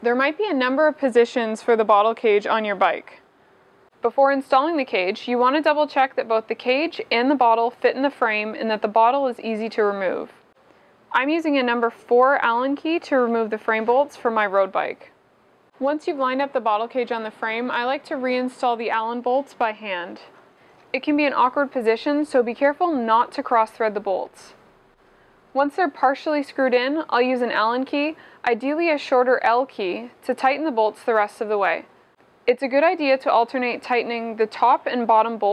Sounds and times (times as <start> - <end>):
Speech: 0.0 - 3.2, 4.0 - 10.4, 11.1 - 15.1, 15.8 - 20.3, 20.9 - 24.6, 25.6 - 31.9, 32.5 - 35.5.